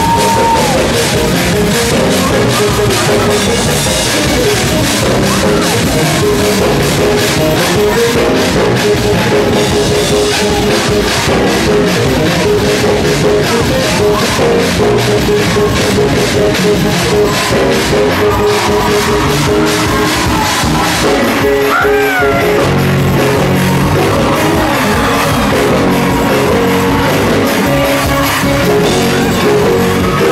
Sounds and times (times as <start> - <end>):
Gospel music: 0.0 - 30.3.